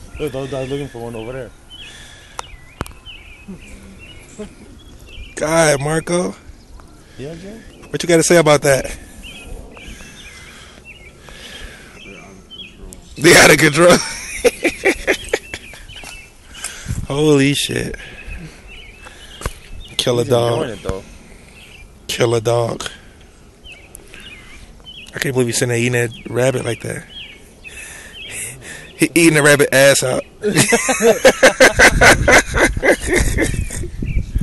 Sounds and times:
Speech: 12.0s - 14.1s, 20.0s - 21.0s, 25.1s - 27.1s, 28.3s - 30.7s.

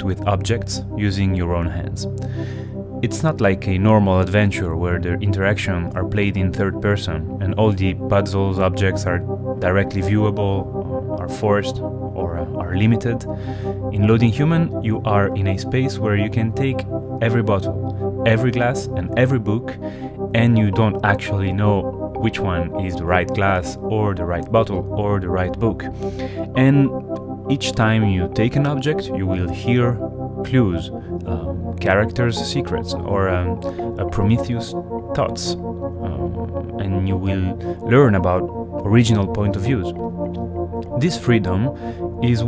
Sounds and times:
Speech: 0.0s - 2.1s, 3.0s - 13.3s, 13.9s - 25.9s, 26.5s - 26.9s, 27.5s - 40.1s, 41.0s - 42.4s
Music: 0.0s - 42.4s.

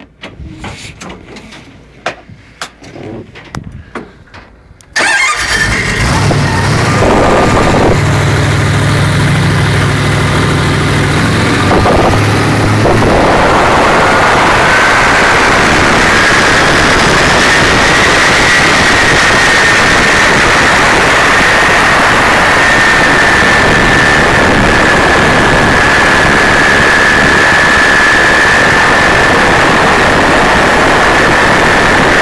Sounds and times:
Motorboat, speedboat: 6.0s - 32.2s.

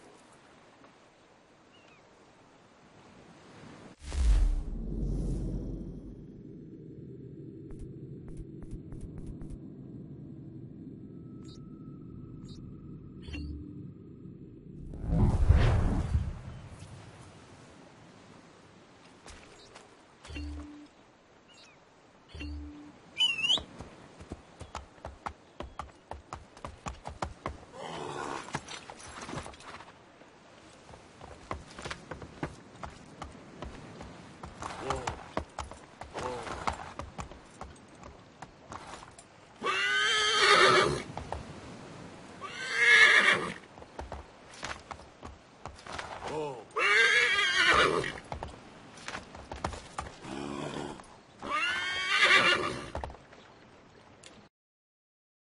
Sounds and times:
Clip-clop: 23.5s - 30.0s, 30.7s - 39.3s, 43.7s - 46.4s, 48.1s - 51.1s.

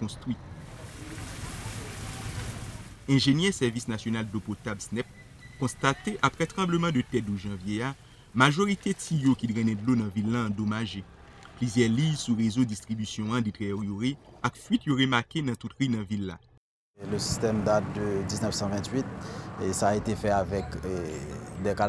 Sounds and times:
Speech: 0.0s - 0.4s, 1.0s - 11.0s, 11.6s - 16.4s, 17.0s - 21.8s.

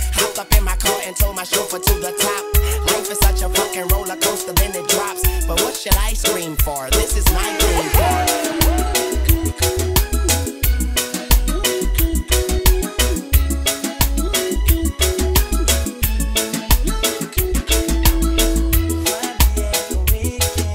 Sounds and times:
Music: 0.0s - 20.7s.

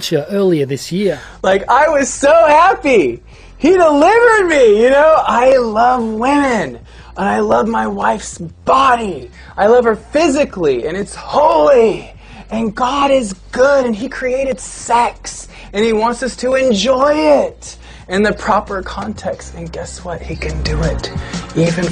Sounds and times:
Inside, small room: 0.0s - 21.9s
Music: 0.0s - 21.9s
Speech: 0.0s - 21.9s.

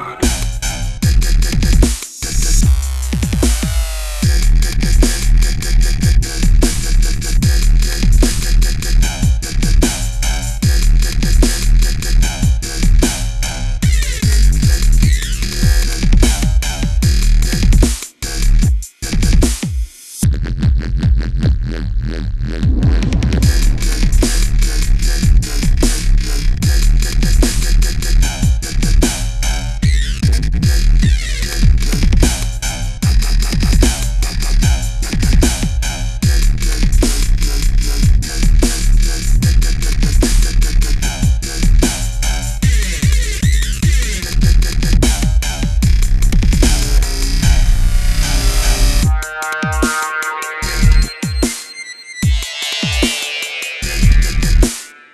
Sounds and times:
Dubstep: 0.0s - 55.1s.

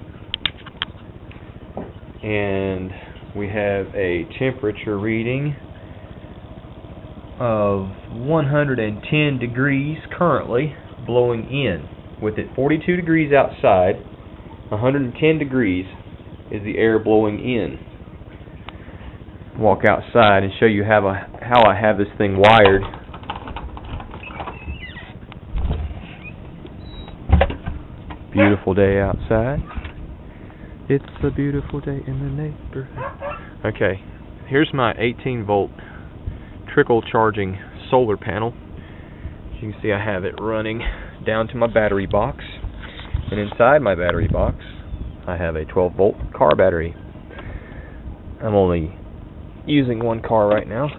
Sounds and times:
Speech: 2.2s - 5.6s, 7.4s - 14.0s, 14.7s - 17.8s, 19.6s - 22.9s, 28.3s - 29.7s, 30.9s - 33.0s, 33.6s - 35.8s, 36.7s - 38.6s, 39.5s - 47.0s, 48.4s - 49.0s, 49.7s - 50.9s.

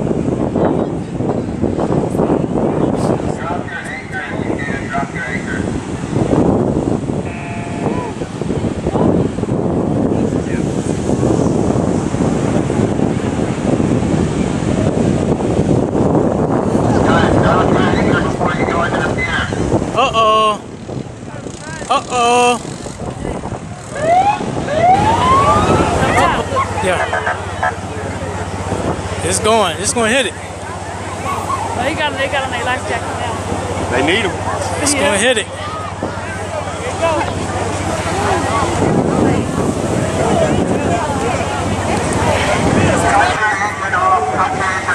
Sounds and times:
Wind noise (microphone): 0.0s - 44.9s.

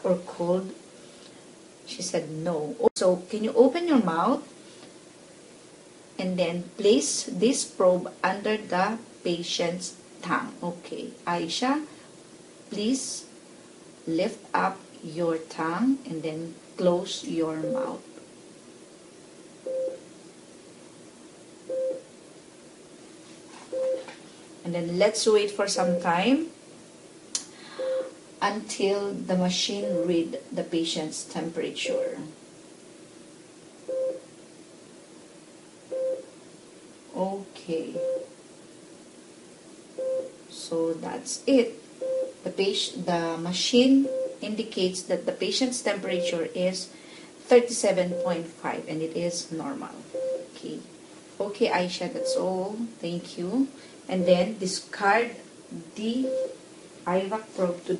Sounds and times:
Speech: 0.0s - 0.8s, 1.9s - 4.5s, 6.2s - 11.9s, 12.7s - 13.3s, 14.1s - 18.0s, 24.6s - 26.5s, 28.0s - 32.4s, 37.1s - 38.1s, 40.5s - 41.8s, 42.5s - 56.4s, 57.1s - 57.9s.

